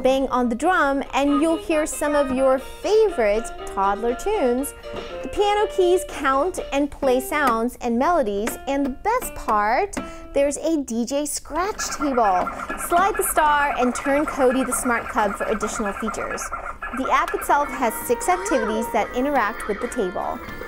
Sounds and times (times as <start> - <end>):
Music: 0.0 - 16.4, 17.0 - 20.6.